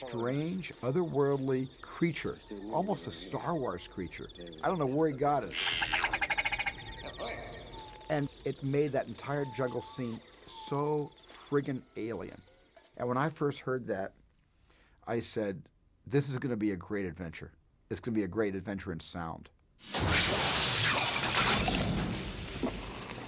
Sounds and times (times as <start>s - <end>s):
Speech: 0.0s - 5.6s, 7.2s - 12.4s, 13.0s - 14.2s, 15.0s - 19.6s.